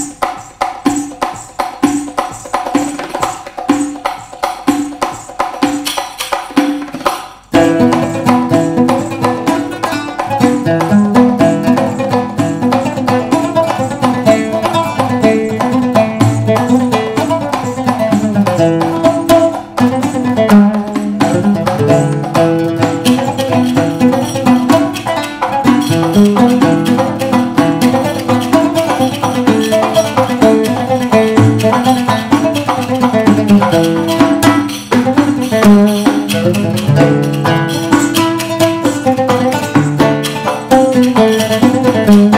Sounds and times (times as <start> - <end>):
Pizzicato: 7.5 - 42.3.